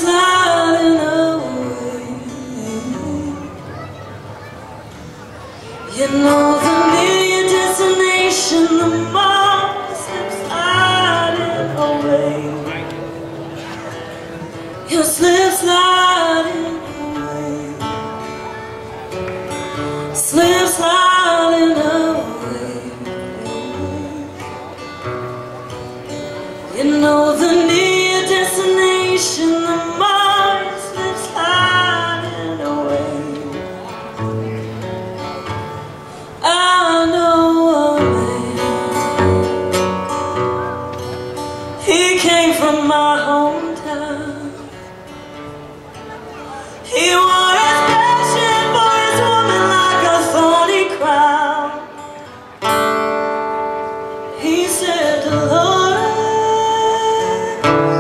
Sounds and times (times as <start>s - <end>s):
Speech: 0.0s - 24.8s
Music: 0.0s - 58.0s.